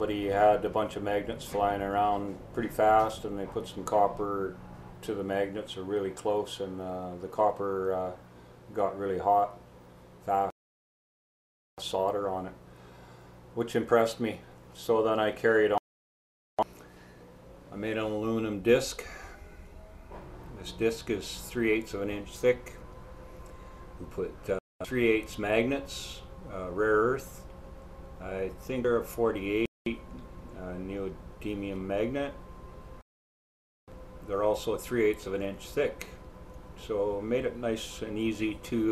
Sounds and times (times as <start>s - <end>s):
Speech: 0.0s - 9.6s, 10.2s - 10.5s, 11.8s - 12.6s, 13.6s - 15.8s, 17.7s - 19.2s, 20.6s - 22.8s, 24.0s - 27.4s, 28.2s - 32.4s, 34.2s - 36.2s, 36.8s - 38.9s.